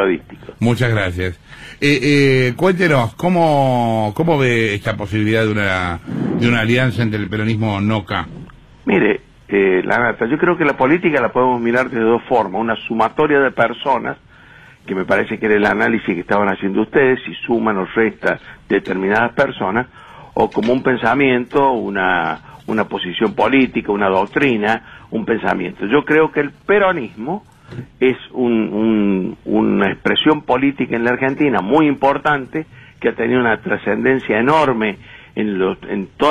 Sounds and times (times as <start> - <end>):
Speech: 0.0 - 14.2, 14.9 - 27.4, 28.0 - 36.3.